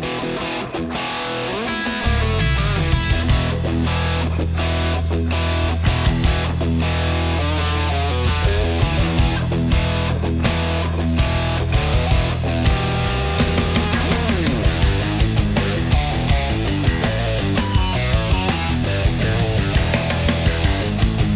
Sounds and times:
Funk: 0.0s - 21.3s
Rhythm and blues: 0.0s - 21.3s.

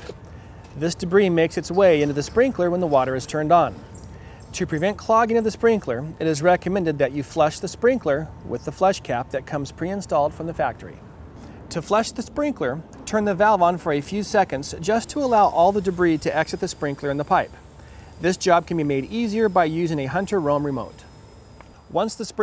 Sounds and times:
Speech: 0.8s - 3.8s, 4.6s - 11.0s, 11.7s - 17.5s, 18.2s - 21.0s, 21.9s - 22.4s.

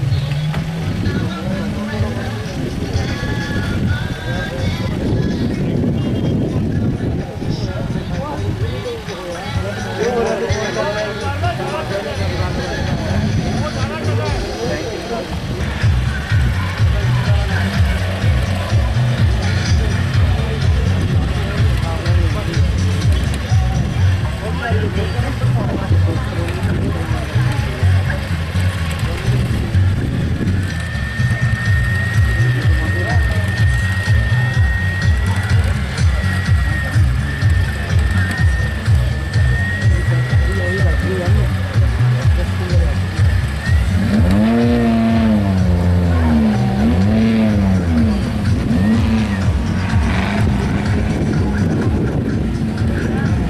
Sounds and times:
Car: 0.0s - 53.5s
Music: 0.0s - 53.5s.

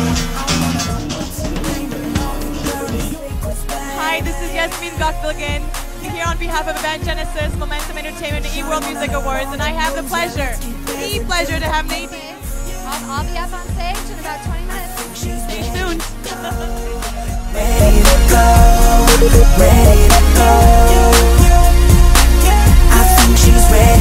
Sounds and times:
Music: 0.0s - 24.0s
Speech: 4.0s - 16.1s.

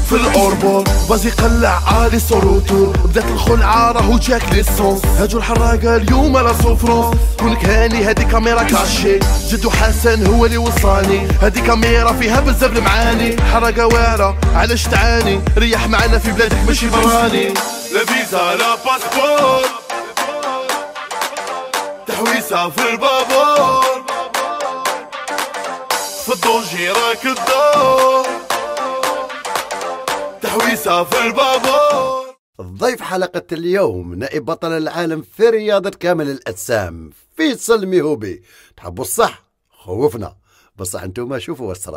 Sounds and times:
Music: 0.0s - 32.4s.

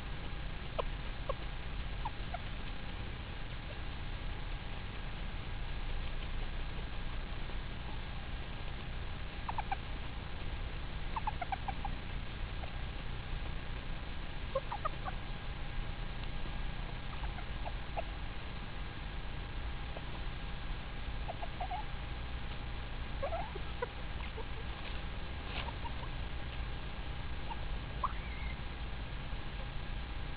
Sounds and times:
Livestock, farm animals, working animals: 0.0s - 30.3s
Bird: 9.4s - 9.9s, 11.1s - 12.8s, 14.5s - 15.4s, 16.8s - 18.2s, 21.2s - 22.0s, 23.2s - 26.7s, 27.4s - 28.8s.

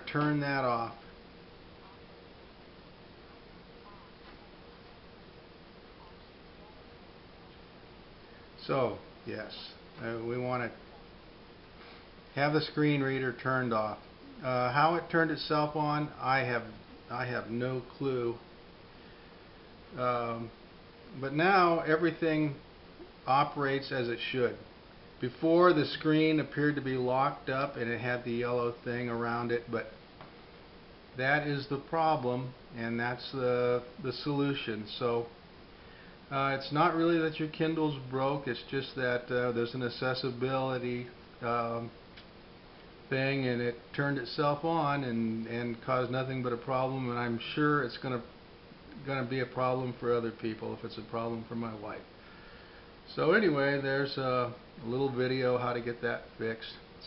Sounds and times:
Speech: 0.0s - 1.1s, 8.6s - 11.0s, 12.3s - 18.5s, 19.9s - 22.6s, 23.2s - 30.0s, 31.2s - 35.4s, 36.3s - 42.0s, 43.1s - 48.3s, 48.9s - 52.1s, 53.1s - 57.0s.

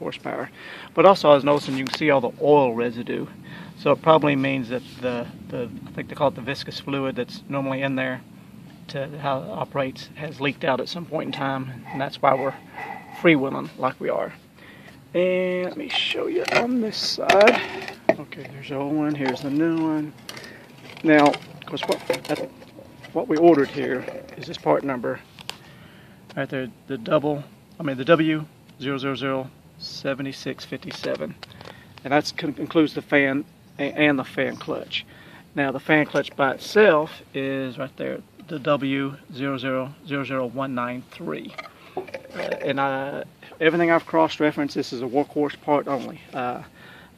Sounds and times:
Speech: 0.0s - 8.2s, 8.9s - 12.6s, 13.2s - 14.4s, 15.1s - 20.2s, 21.0s - 22.5s, 23.1s - 25.2s, 26.3s - 31.4s, 32.0s - 41.6s, 42.4s - 46.7s.

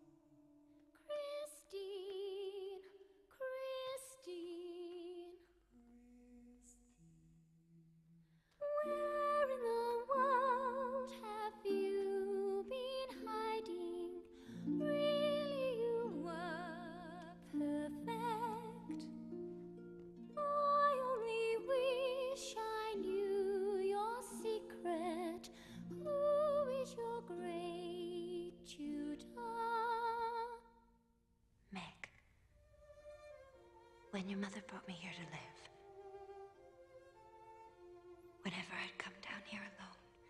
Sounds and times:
Opera: 1.0s - 6.8s, 8.6s - 30.8s.

